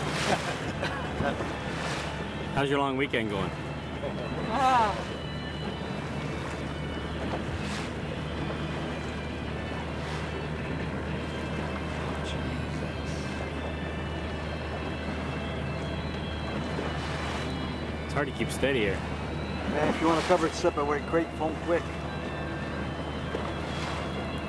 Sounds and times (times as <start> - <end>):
Boat, Water vehicle: 0.0 - 24.4
Music: 0.0 - 24.4
Speech: 18.1 - 19.0, 19.7 - 21.8.